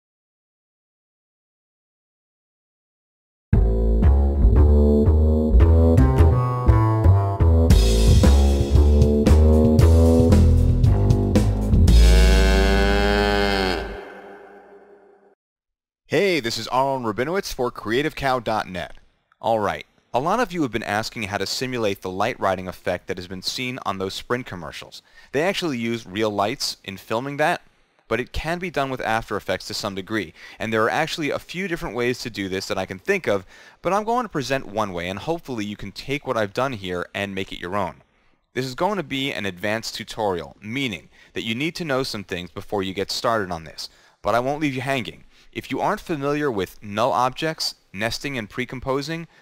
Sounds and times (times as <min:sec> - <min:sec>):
Speech: 0:16.1 - 0:38.0, 0:38.6 - 0:49.3.